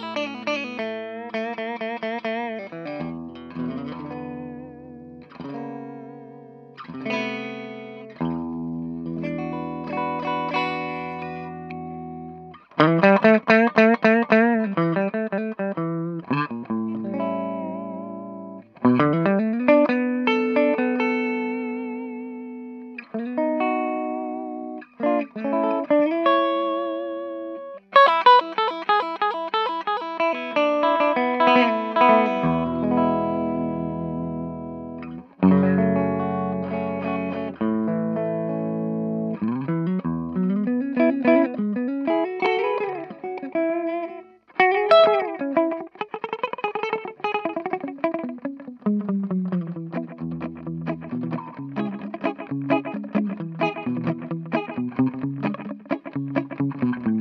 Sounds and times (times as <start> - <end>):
Bass guitar: 3.1 - 22.3, 31.5 - 42.2, 47.8 - 57.2.